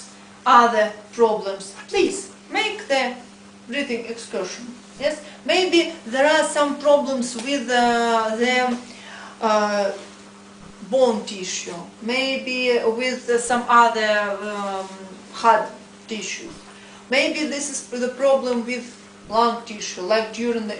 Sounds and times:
Speech: 0.0 - 10.1, 10.8 - 20.8.

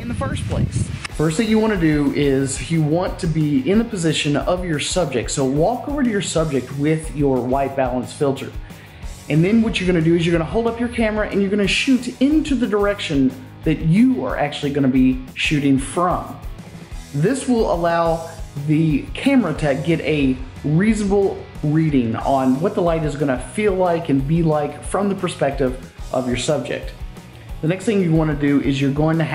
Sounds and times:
Speech: 0.0 - 8.6, 9.3 - 16.4, 17.2 - 27.0, 27.6 - 29.3.

